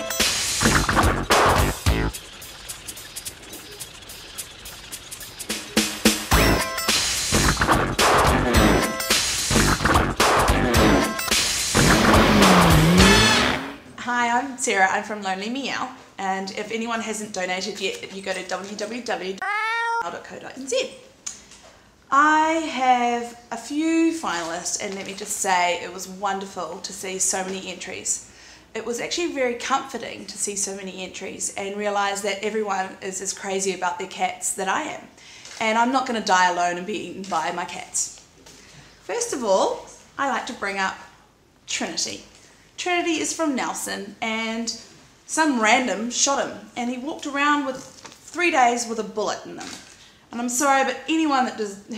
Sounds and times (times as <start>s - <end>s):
Music: 0.0s - 2.2s, 5.4s - 13.9s
Speech: 14.0s - 21.1s, 22.1s - 28.2s, 28.8s - 38.2s, 39.1s - 41.1s, 41.7s - 51.9s.